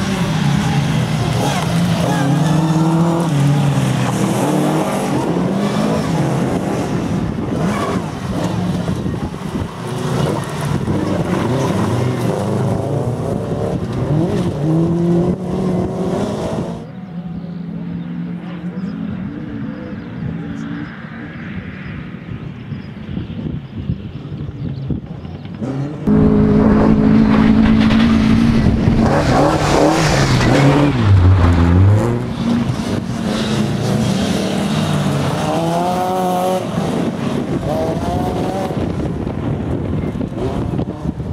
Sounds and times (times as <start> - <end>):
Race car, auto racing: 0.0 - 41.3.